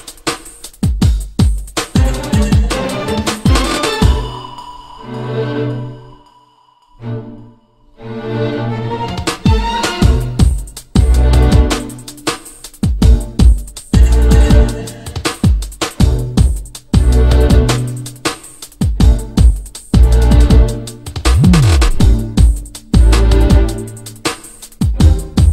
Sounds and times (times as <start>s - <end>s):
Music: 0.0s - 25.5s.